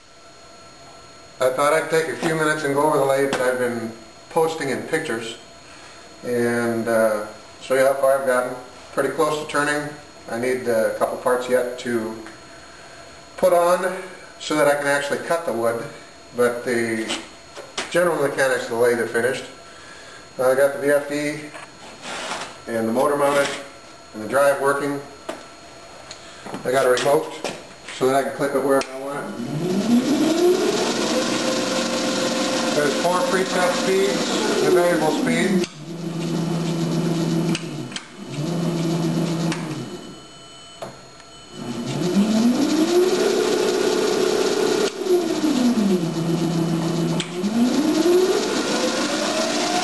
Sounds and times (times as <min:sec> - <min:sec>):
Speech: 0:01.4 - 0:05.5, 0:06.2 - 0:12.4, 0:13.4 - 0:19.6, 0:20.4 - 0:21.6, 0:22.7 - 0:25.2, 0:26.6 - 0:29.4, 0:32.8 - 0:35.7.